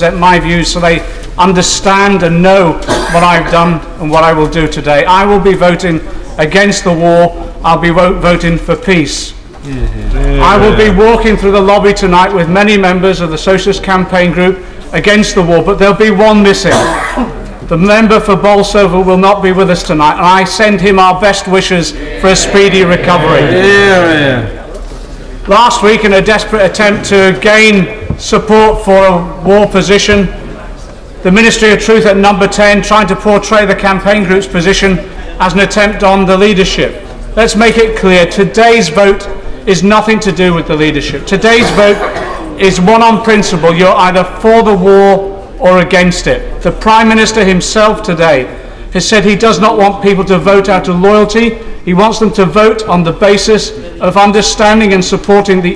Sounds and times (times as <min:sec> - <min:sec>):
Male speech, man speaking: 0:00.0 - 0:17.0, 0:17.7 - 0:24.6, 0:25.4 - 0:30.6, 0:31.2 - 0:55.7
Narration, monologue: 0:00.0 - 0:55.7.